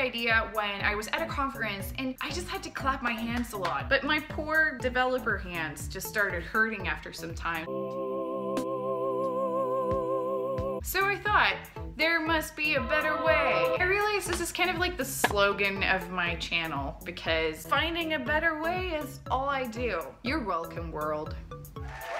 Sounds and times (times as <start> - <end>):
Speech: 0.0 - 7.7, 10.8 - 21.4
Music: 0.0 - 22.1.